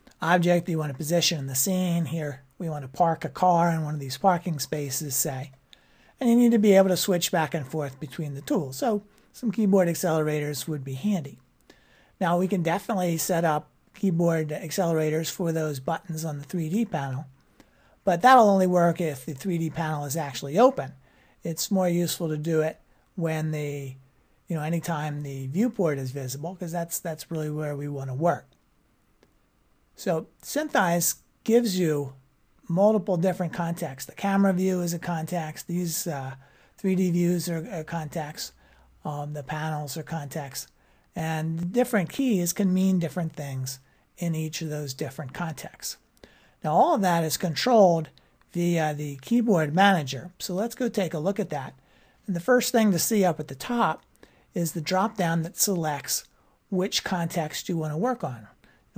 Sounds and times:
Speech: 0.2s - 5.6s, 6.2s - 11.4s, 12.2s - 17.3s, 18.0s - 28.6s, 30.0s - 46.0s, 46.6s - 58.9s.

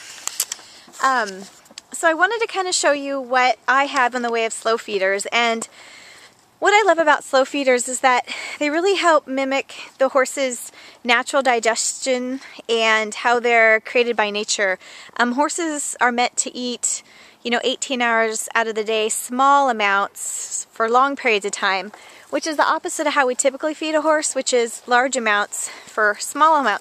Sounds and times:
Speech: 1.0s - 5.7s, 6.6s - 26.8s.

